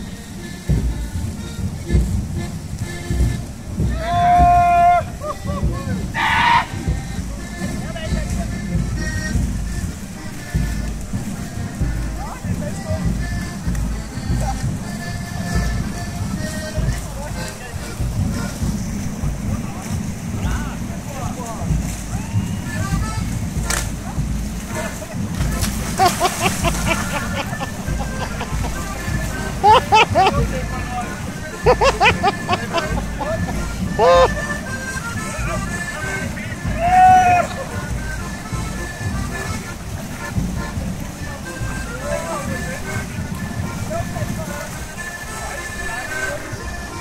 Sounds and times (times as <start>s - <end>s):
Music: 0.0s - 47.0s
Waterfall: 0.0s - 47.0s
Speech: 7.3s - 8.8s, 12.1s - 13.3s, 16.7s - 18.0s, 19.4s - 22.2s, 28.1s - 34.3s, 40.6s - 47.0s.